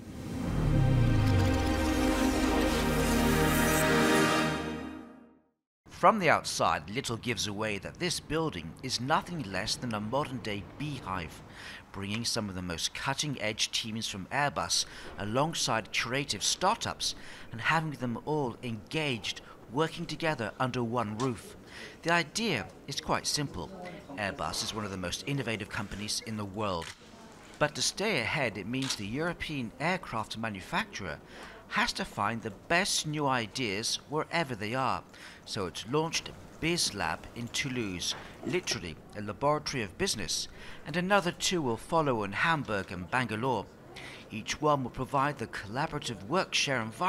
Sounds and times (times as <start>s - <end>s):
Speech: 5.9s - 43.7s, 44.3s - 47.0s.